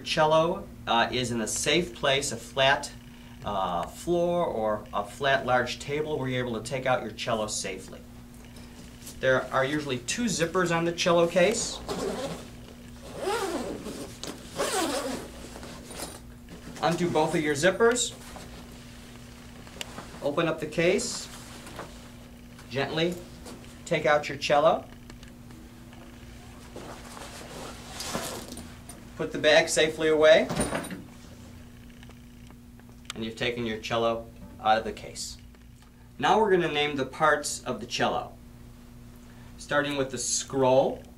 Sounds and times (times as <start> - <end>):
Speech: 0.0 - 8.0, 9.2 - 11.8, 16.8 - 18.2, 20.2 - 21.3, 22.7 - 23.2, 23.9 - 24.9, 29.2 - 30.5, 33.1 - 35.4, 36.2 - 38.4, 39.6 - 41.1.